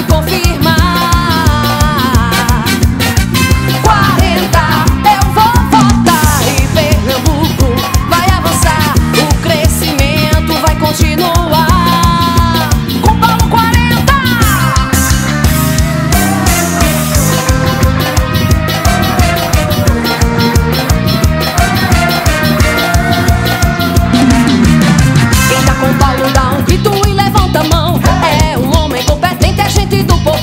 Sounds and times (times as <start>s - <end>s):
Music: 0.0s - 30.4s.